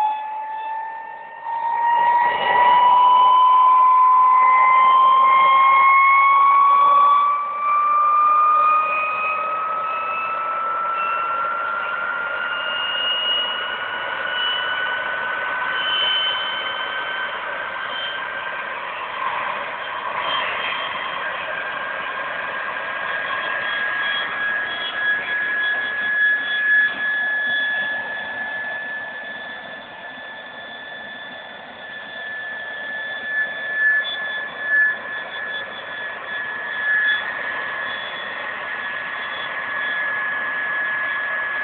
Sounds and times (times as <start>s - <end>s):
Jet engine: 0.0s - 41.6s.